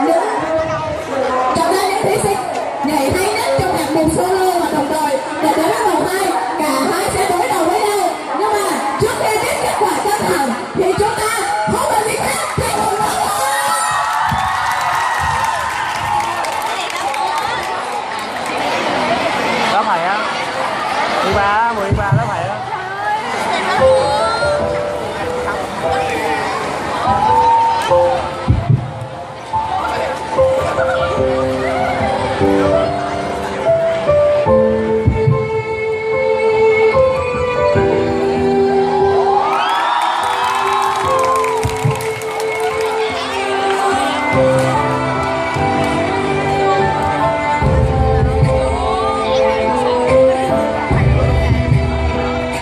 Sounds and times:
Music: 0:00.0 - 0:17.1, 0:21.8 - 0:52.6.

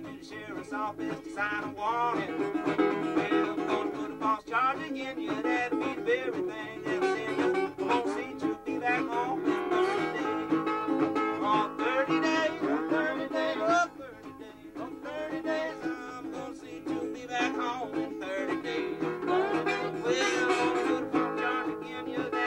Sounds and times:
Banjo: 0:00.0 - 0:22.4
Country: 0:00.0 - 0:22.4
Guitar: 0:00.0 - 0:22.4.

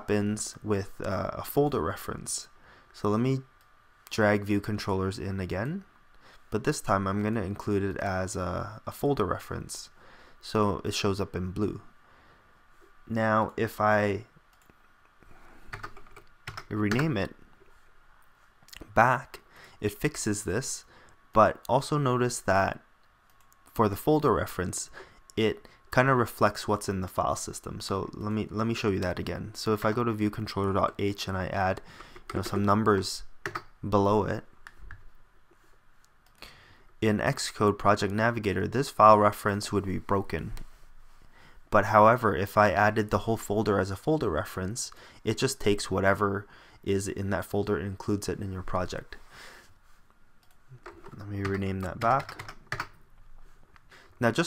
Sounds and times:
Speech: 0:00.0 - 0:03.5, 0:04.1 - 0:05.9, 0:06.5 - 0:11.9, 0:13.1 - 0:14.3, 0:16.7 - 0:17.4, 0:18.7 - 0:22.9, 0:23.7 - 0:34.5, 0:37.0 - 0:40.6, 0:41.7 - 0:49.2, 0:51.2 - 0:52.4, 0:54.2 - 0:54.4
Computer keyboard: 0:15.7 - 0:17.1, 0:33.4 - 0:33.7, 0:50.4 - 0:53.0.

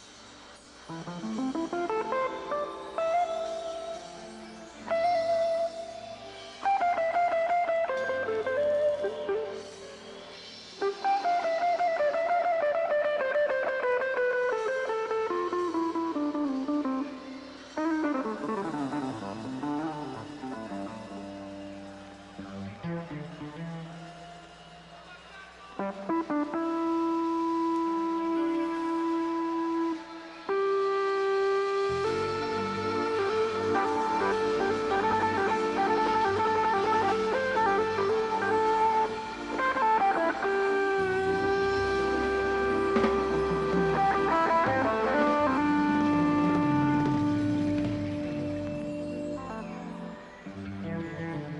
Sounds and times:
Music: 0:00.0 - 0:51.5.

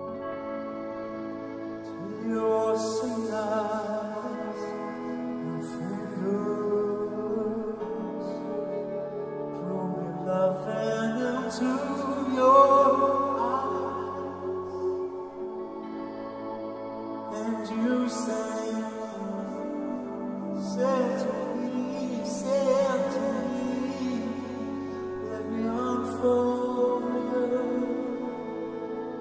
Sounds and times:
Music: 0:00.0 - 0:29.2.

